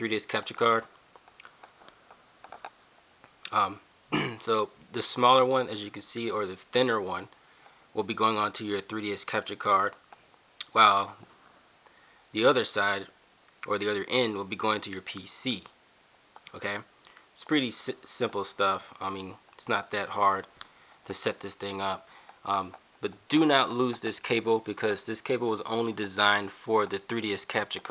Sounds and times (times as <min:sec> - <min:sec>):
Speech: 0:00.0 - 0:00.9, 0:03.5 - 0:07.4, 0:08.0 - 0:10.0, 0:10.6 - 0:11.3, 0:12.4 - 0:15.8, 0:16.5 - 0:20.5, 0:21.1 - 0:27.9
Inside, small room: 0:00.0 - 0:27.9.